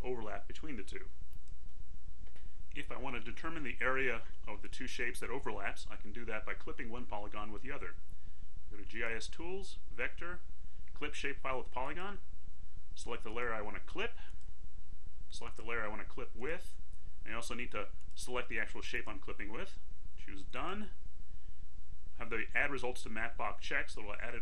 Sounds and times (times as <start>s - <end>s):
Speech: 0.0s - 1.1s, 2.8s - 8.0s, 8.7s - 12.3s, 13.0s - 14.4s, 15.3s - 21.0s, 22.2s - 24.4s.